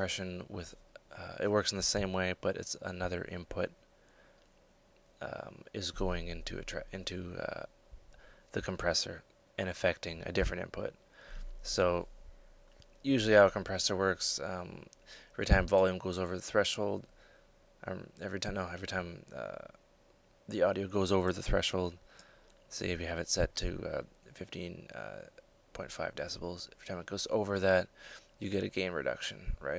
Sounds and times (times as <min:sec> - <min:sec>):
Speech: 0:00.0 - 0:03.8, 0:05.2 - 0:07.7, 0:08.5 - 0:11.0, 0:11.6 - 0:12.1, 0:13.0 - 0:17.1, 0:17.8 - 0:19.8, 0:20.5 - 0:22.0, 0:22.7 - 0:29.7.